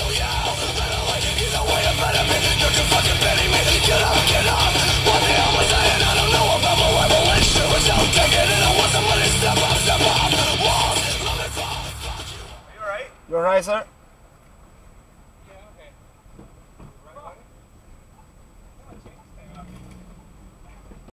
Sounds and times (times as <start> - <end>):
Vehicle: 0.0 - 21.1
Speech: 15.4 - 16.0, 18.8 - 19.8.